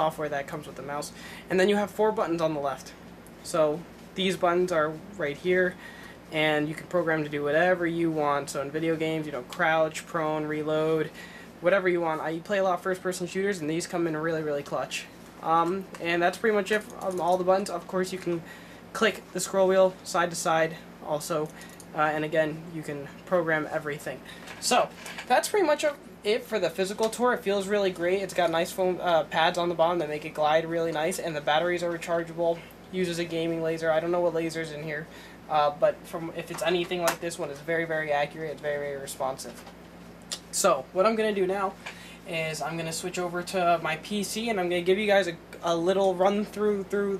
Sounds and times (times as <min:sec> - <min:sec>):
Speech: 0:00.0 - 0:39.7, 0:40.3 - 0:47.1
Inside, small room: 0:00.0 - 0:47.1.